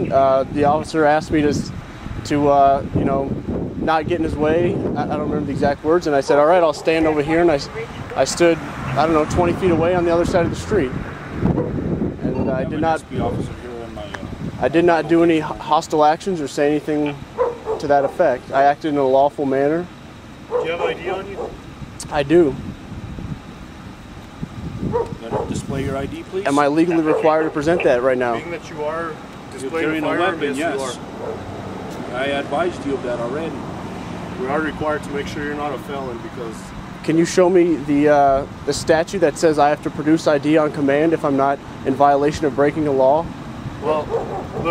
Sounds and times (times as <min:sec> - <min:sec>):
Wind noise (microphone): 0:00.0 - 0:06.0, 0:09.2 - 0:15.2, 0:22.5 - 0:23.5, 0:24.3 - 0:26.2.